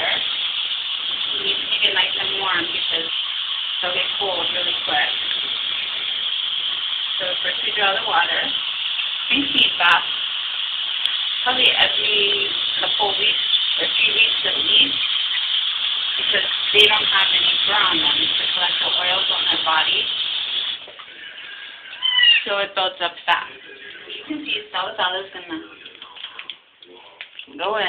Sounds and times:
Speech: 0.0 - 0.2, 1.3 - 3.1, 3.8 - 5.2, 7.2 - 8.6, 9.3 - 10.1, 11.5 - 15.0, 16.2 - 20.1, 22.5 - 27.8
Gush: 0.0 - 26.6.

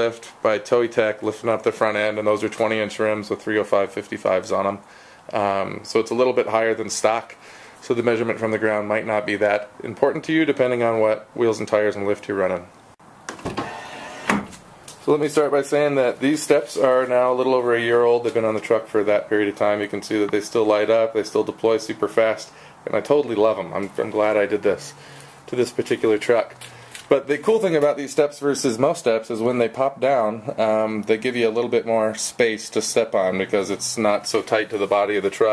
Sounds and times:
Speech: 0.0 - 12.7, 15.0 - 35.5.

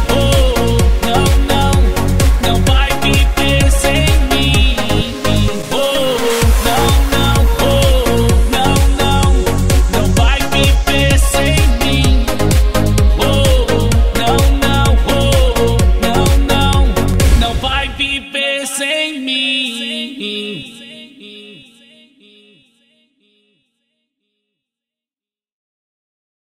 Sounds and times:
Rhythm and blues: 0.0 - 18.5.

